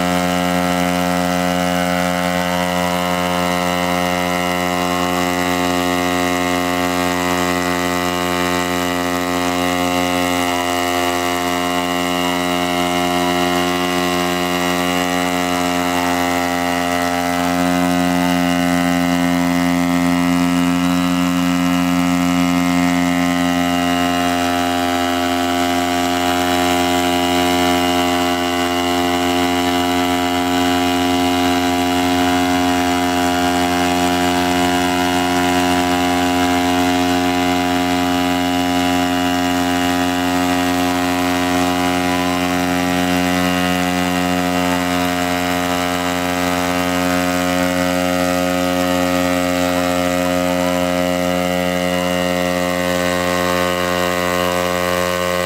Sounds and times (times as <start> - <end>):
Engine: 0.0 - 55.4.